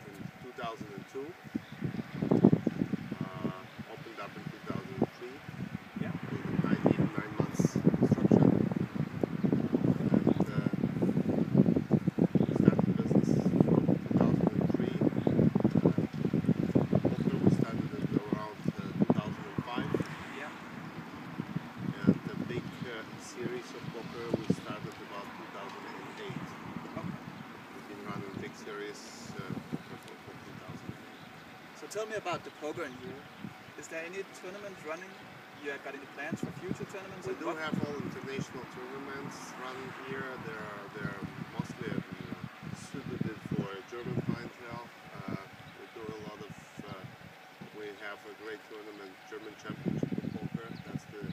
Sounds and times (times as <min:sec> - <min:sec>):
Speech: 0:00.0 - 0:01.4, 0:03.2 - 0:05.4, 0:06.0 - 0:08.6, 0:10.3 - 0:10.8, 0:12.5 - 0:15.1, 0:17.2 - 0:20.6, 0:21.9 - 0:27.2, 0:27.8 - 0:30.9, 0:31.8 - 0:33.2, 0:33.8 - 0:47.1, 0:47.8 - 0:51.3.